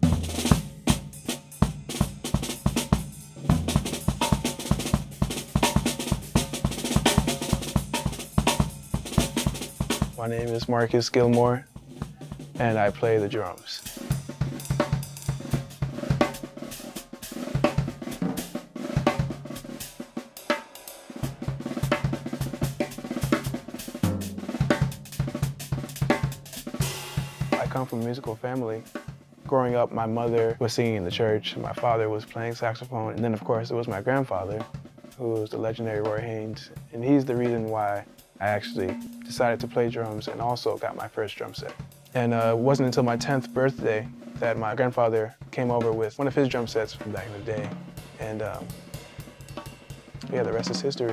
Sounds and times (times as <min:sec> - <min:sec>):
Bass drum: 0:00.0 - 0:19.8, 0:21.2 - 0:35.0, 0:35.6 - 0:51.1
Drum kit: 0:00.0 - 0:51.1
Drum roll: 0:00.0 - 0:51.1
Speech: 0:10.2 - 0:11.6, 0:12.6 - 0:13.9, 0:27.6 - 0:28.9, 0:29.5 - 0:48.8, 0:50.2 - 0:51.1.